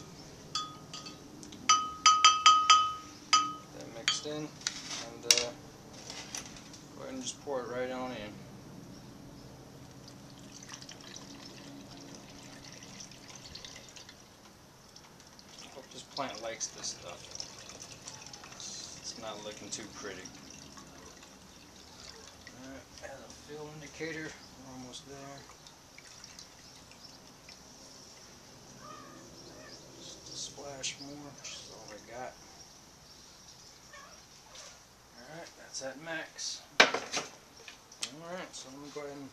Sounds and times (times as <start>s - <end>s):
Fill (with liquid): 10.0s - 23.3s, 25.3s - 27.7s.